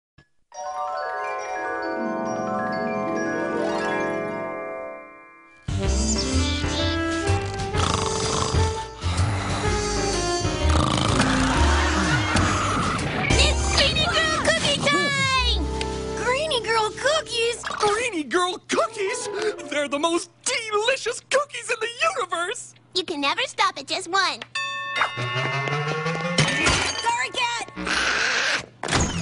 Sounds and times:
Music: 0:00.5 - 0:17.8, 0:25.2 - 0:26.6.

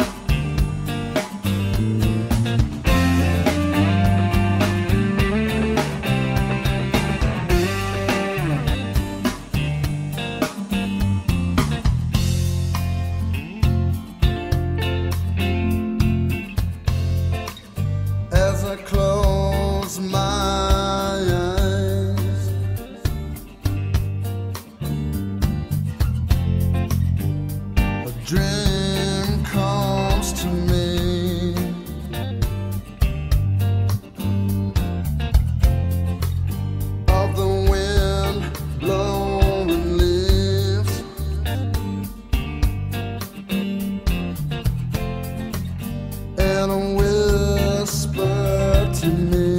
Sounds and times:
Music: 0:00.0 - 0:49.5.

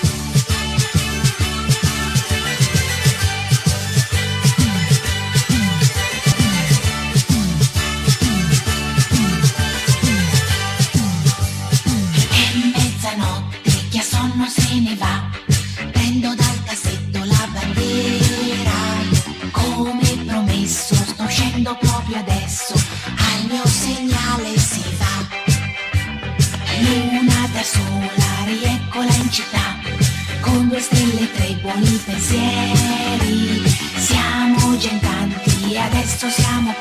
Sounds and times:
Music: 0:00.0 - 0:36.8
Singing: 0:12.3 - 0:15.3, 0:16.0 - 0:25.3, 0:26.7 - 0:29.9, 0:30.5 - 0:36.8.

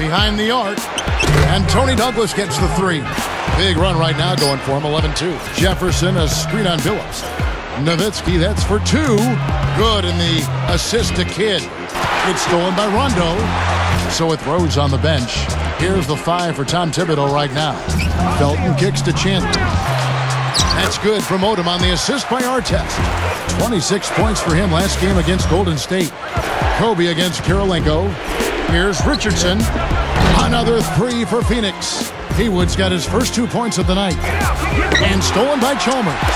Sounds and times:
Speech: 0:00.0 - 0:13.5, 0:14.1 - 0:19.9, 0:20.6 - 0:26.1, 0:26.7 - 0:36.3
Music: 0:00.0 - 0:36.3.

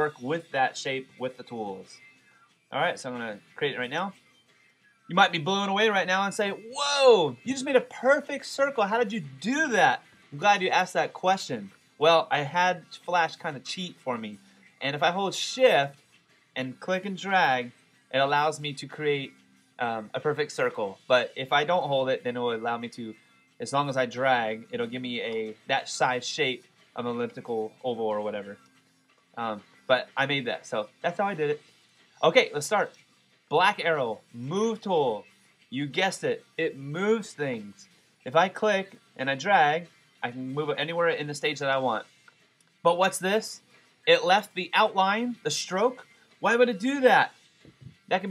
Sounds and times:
Speech: 0:00.0 - 0:02.0, 0:02.8 - 0:04.2, 0:05.1 - 0:16.0, 0:16.6 - 0:28.6, 0:29.4 - 0:31.6, 0:32.2 - 0:32.9, 0:33.5 - 0:42.1, 0:42.9 - 0:47.3
Music: 0:00.0 - 0:48.3.

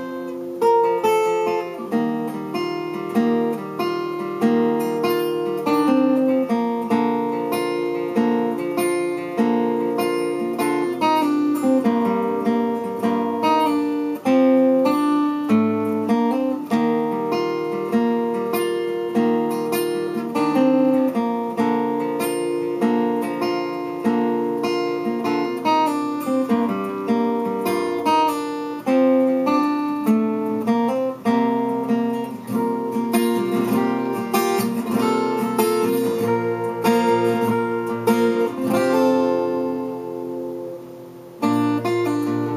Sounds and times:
Acoustic guitar: 0:00.0 - 0:42.5.

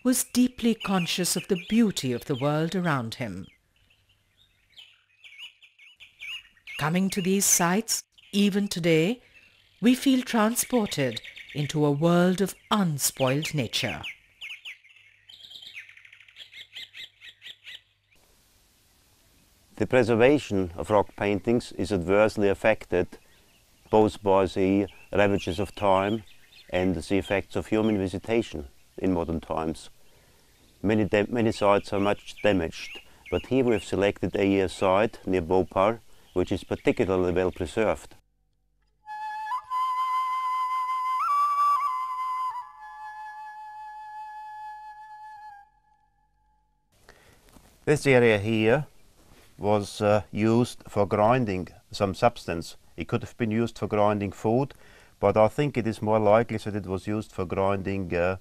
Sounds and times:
Chirp, tweet: 0:00.2 - 0:07.4, 0:09.2 - 0:18.2, 0:23.2 - 0:28.5.

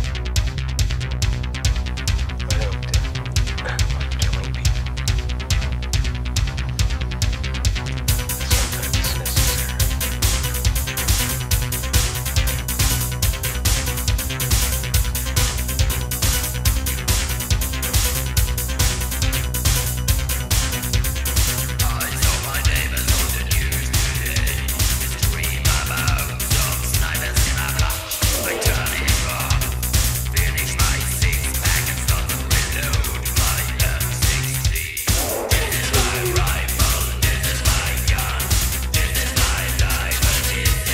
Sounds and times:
Music: 0:00.0 - 0:40.9.

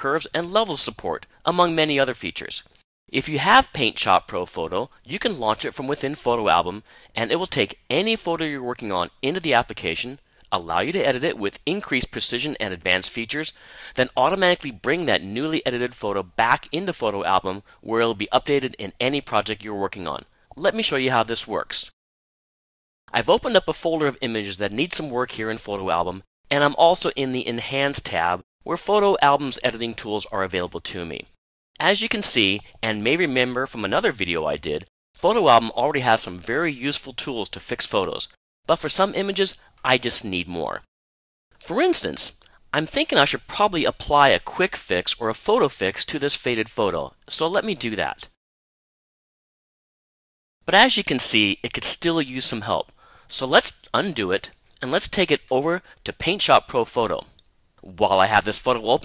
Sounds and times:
Speech: 0:00.0 - 0:22.0, 0:23.1 - 0:40.9, 0:41.6 - 0:48.4, 0:50.7 - 0:59.0.

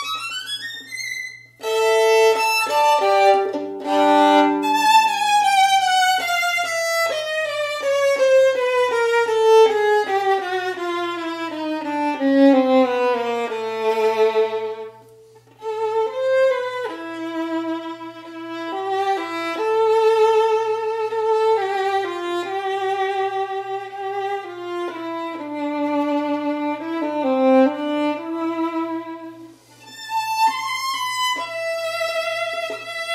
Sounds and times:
Violin, fiddle: 0:00.0 - 0:33.1.

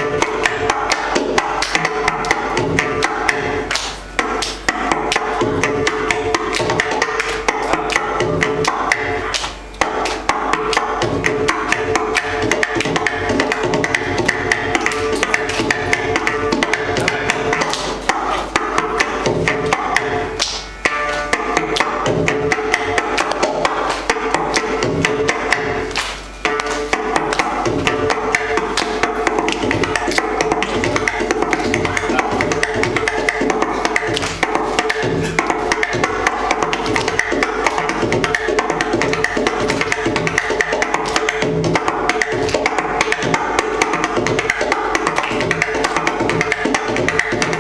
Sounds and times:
Wood block: 0:00.0 - 0:47.6.

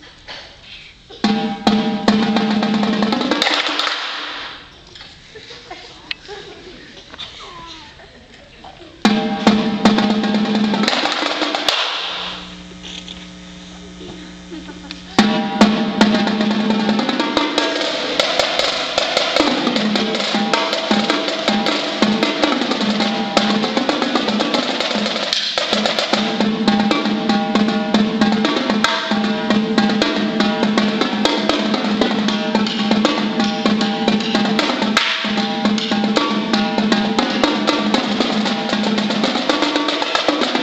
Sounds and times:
Percussion: 0:01.1 - 0:05.1, 0:09.0 - 0:13.1, 0:15.0 - 0:40.6.

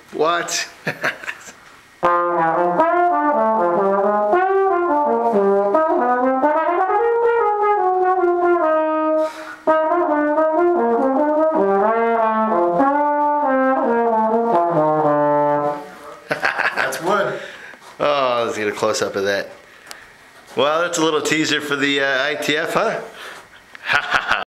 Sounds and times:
Speech: 0:00.1 - 0:00.8, 0:16.8 - 0:17.4, 0:18.0 - 0:19.6, 0:20.6 - 0:23.2
Music: 0:02.0 - 0:16.2.

